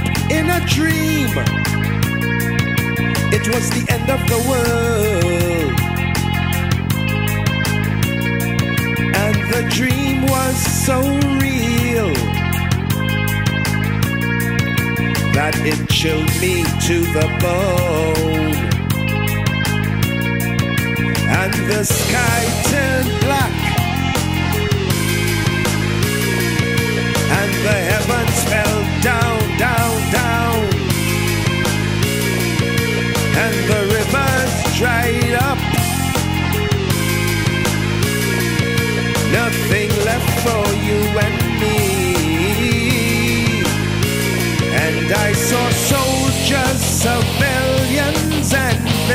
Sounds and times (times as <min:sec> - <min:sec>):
Music: 0:00.0 - 0:49.1.